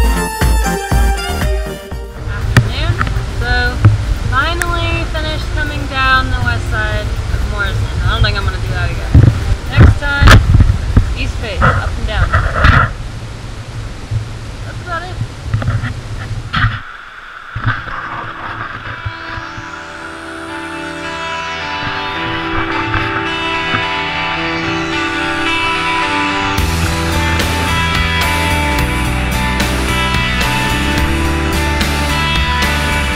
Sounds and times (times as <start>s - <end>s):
White noise: 2.2s - 33.1s
Speech: 2.6s - 3.8s, 4.4s - 10.4s, 11.2s - 12.4s, 14.7s - 15.2s.